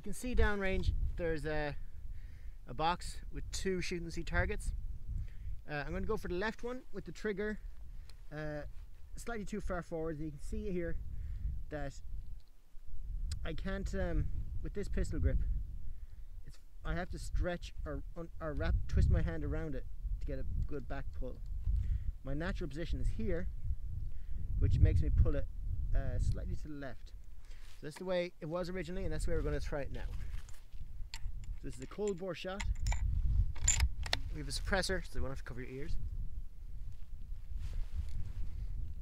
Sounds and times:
Speech: 0.0 - 1.8, 2.7 - 4.8, 5.7 - 7.6, 8.3 - 11.0, 11.7 - 12.0, 13.4 - 15.5, 16.5 - 21.4, 22.2 - 23.5, 24.6 - 27.1, 27.8 - 30.2, 31.6 - 32.7, 34.3 - 36.0.

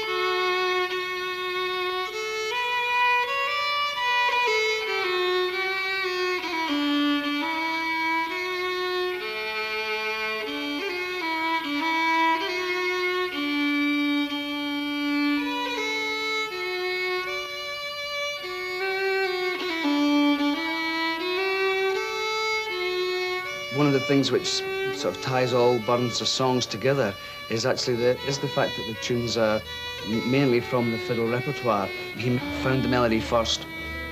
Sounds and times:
Violin, fiddle: 0.0 - 34.1
Speech: 23.7 - 33.7.

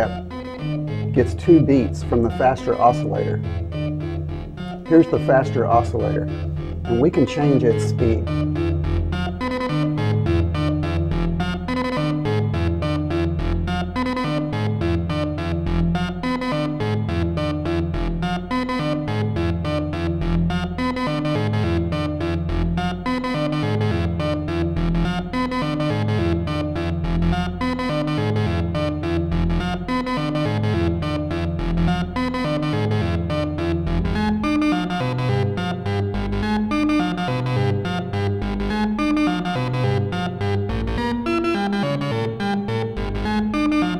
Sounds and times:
Synthesizer: 0.0 - 43.9.

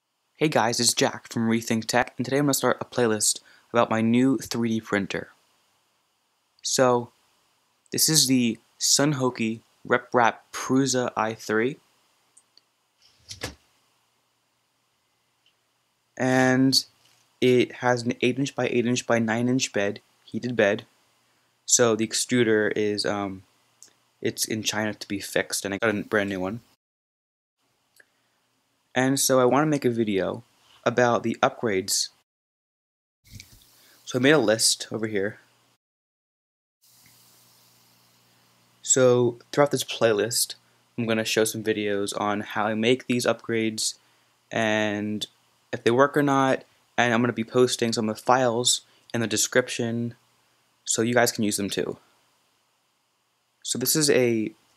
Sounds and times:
Speech: 0.4 - 5.4, 6.6 - 7.1, 7.9 - 11.8, 16.2 - 20.9, 21.7 - 23.4, 24.2 - 26.8, 28.9 - 32.2, 34.1 - 35.4, 38.8 - 50.2, 50.9 - 52.0, 53.6 - 54.6.

